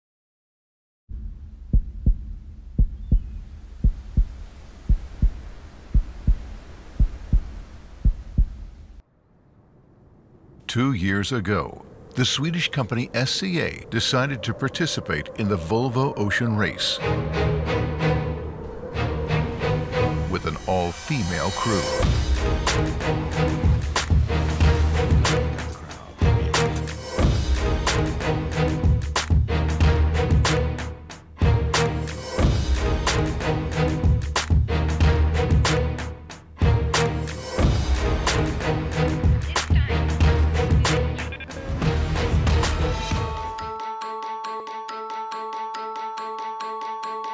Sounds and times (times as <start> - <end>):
Heart murmur: 1.7 - 8.8.